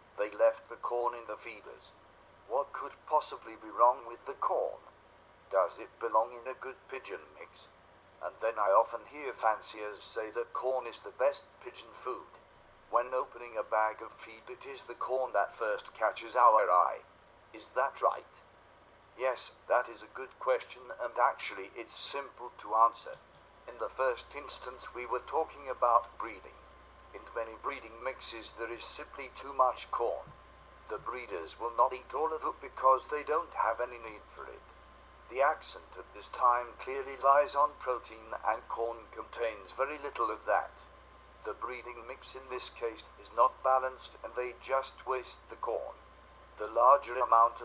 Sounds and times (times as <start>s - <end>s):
Speech: 0.2s - 4.9s, 5.5s - 18.4s, 19.2s - 26.6s, 27.2s - 30.3s, 30.9s - 34.7s, 35.3s - 40.8s, 41.5s - 46.0s, 46.6s - 47.6s.